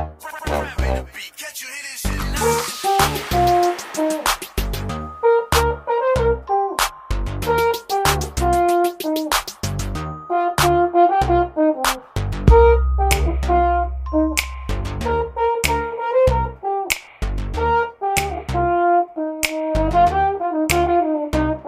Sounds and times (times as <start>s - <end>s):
Hip hop music: 0.0s - 21.6s
Ringtone: 2.2s - 11.4s, 12.5s - 16.0s.